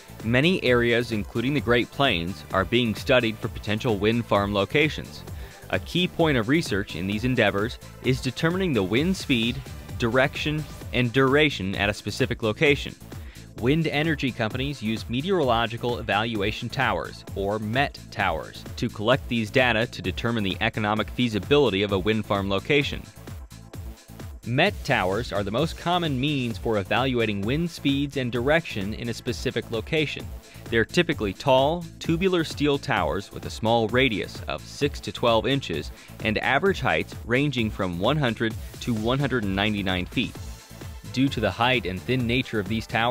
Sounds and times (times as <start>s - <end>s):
Music: 0.0s - 43.1s
Speech: 0.2s - 13.0s, 13.6s - 23.1s, 24.5s - 40.4s, 41.1s - 43.1s.